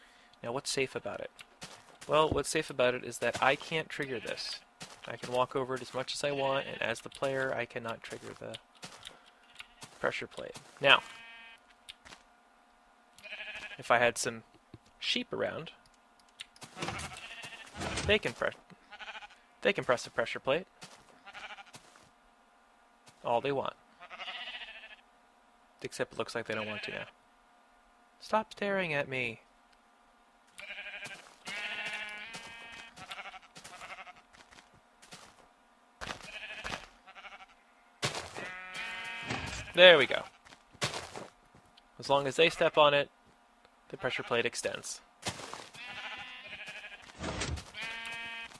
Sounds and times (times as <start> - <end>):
Speech: 0.4 - 1.3, 2.1 - 8.6, 10.0 - 11.0, 13.8 - 14.4, 15.0 - 15.8, 17.9 - 18.6, 19.6 - 20.7, 23.2 - 23.8, 25.8 - 27.1, 28.2 - 29.4, 39.4 - 40.3, 42.0 - 43.1, 43.9 - 45.0.